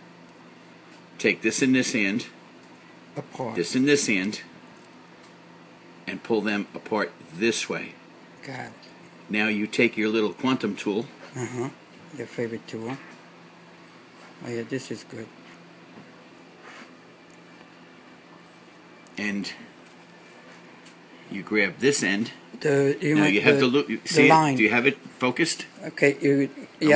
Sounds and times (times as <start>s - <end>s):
Speech: 1.2s - 2.4s, 3.2s - 4.5s, 6.1s - 13.1s, 14.4s - 15.3s, 19.2s - 19.7s, 21.3s - 26.9s.